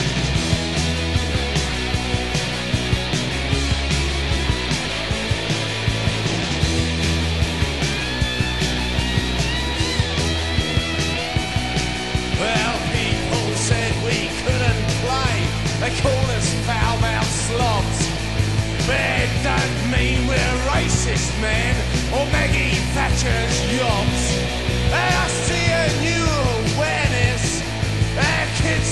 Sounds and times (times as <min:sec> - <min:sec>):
Rock and roll: 0:00.0 - 0:28.9.